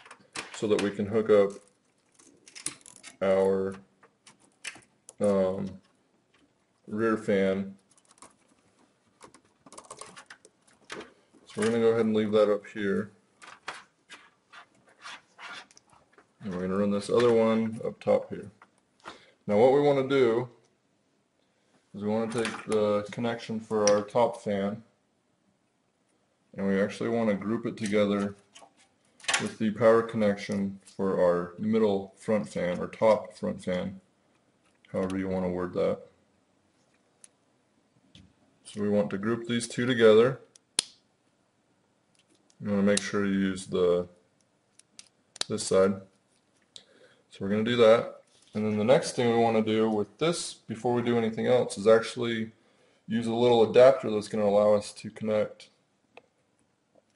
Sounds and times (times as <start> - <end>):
Speech: 0.4 - 1.7, 3.2 - 3.9, 5.2 - 5.8, 6.9 - 7.8, 11.5 - 13.2, 16.4 - 18.6, 19.5 - 20.6, 22.0 - 24.9, 26.6 - 28.4, 29.4 - 34.1, 34.9 - 36.1, 38.7 - 40.5, 42.6 - 44.2, 45.5 - 46.1, 47.3 - 55.8
Typing: 9.2 - 10.5.